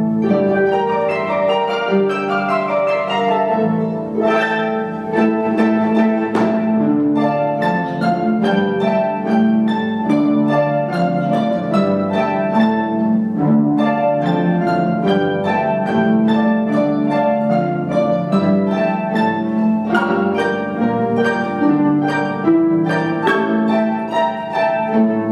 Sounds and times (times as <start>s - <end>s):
Classical music: 0.0s - 25.3s
Orchestra: 0.0s - 25.3s
Plucked string instrument: 0.0s - 25.3s.